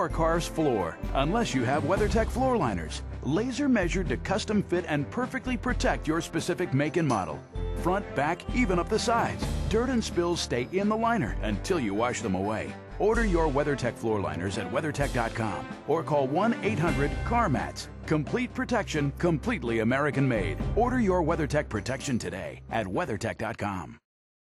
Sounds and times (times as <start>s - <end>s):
Music: 0.0s - 24.0s
Speech: 0.0s - 24.1s.